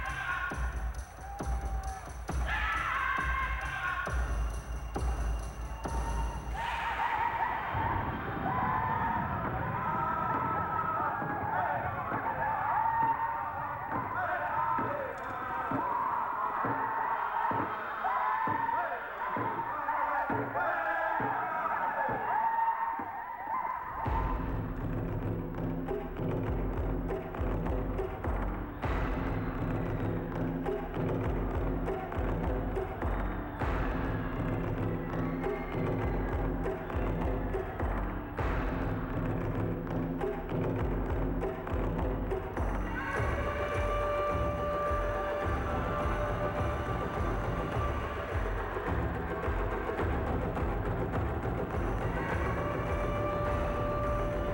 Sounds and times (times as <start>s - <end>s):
Timpani: 24.0s - 54.5s.